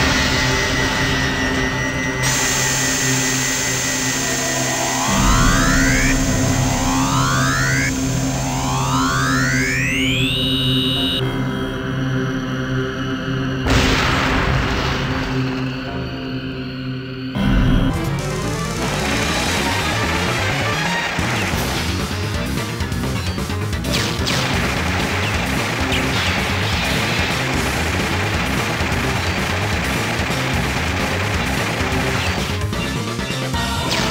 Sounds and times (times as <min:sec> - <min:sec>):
Video game music: 0:00.0 - 0:34.1.